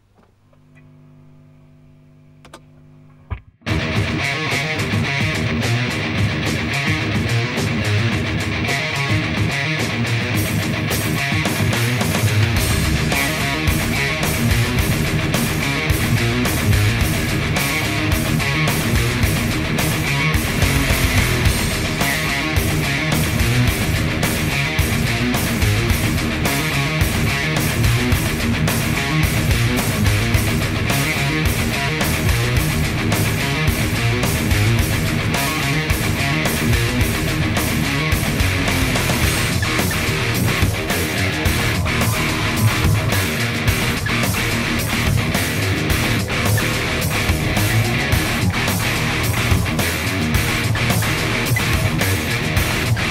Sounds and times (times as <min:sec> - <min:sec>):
Guitar: 0:02.4 - 0:53.1.